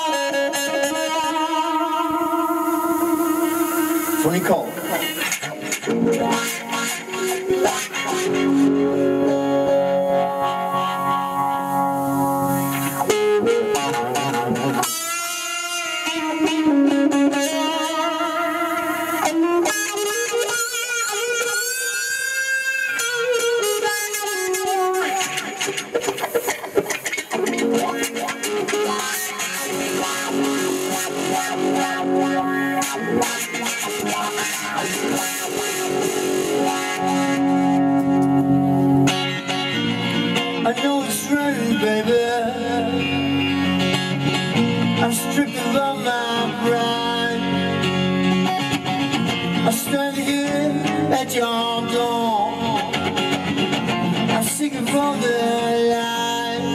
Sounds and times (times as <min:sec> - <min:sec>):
Music: 0:00.0 - 0:56.7.